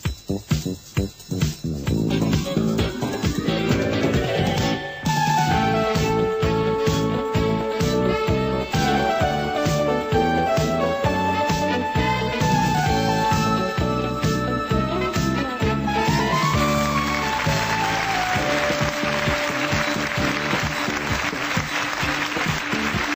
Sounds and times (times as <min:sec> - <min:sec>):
Music: 0:00.0 - 0:23.1.